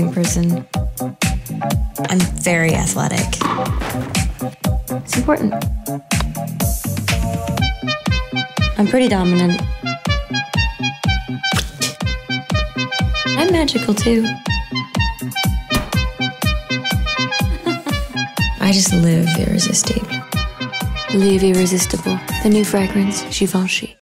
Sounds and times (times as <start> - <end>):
Speech: 0.0 - 0.6, 2.0 - 3.4, 5.1 - 5.6, 8.8 - 9.7, 13.3 - 14.4, 18.6 - 20.1, 21.1 - 24.0
Music: 0.0 - 24.0.